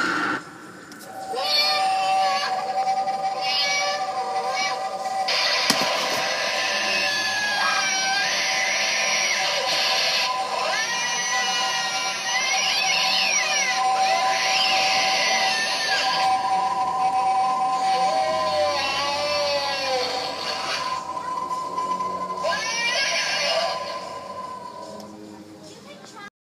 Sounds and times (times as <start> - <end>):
Music: 0.1 - 26.3
Speech: 25.6 - 26.3.